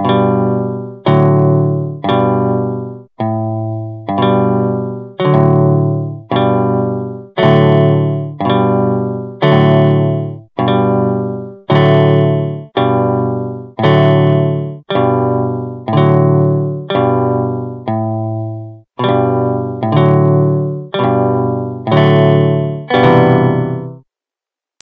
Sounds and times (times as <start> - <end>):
Strum: 0.0 - 24.0.